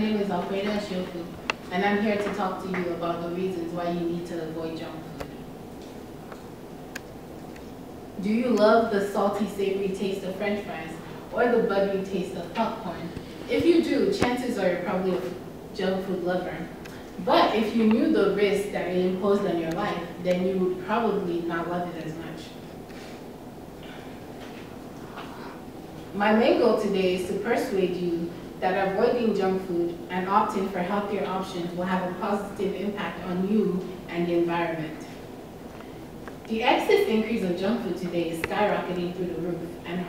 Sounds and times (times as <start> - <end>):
Female speech, woman speaking: 0.0 - 5.3, 8.2 - 22.6, 26.2 - 35.2, 36.5 - 40.0
Narration, monologue: 0.0 - 40.0.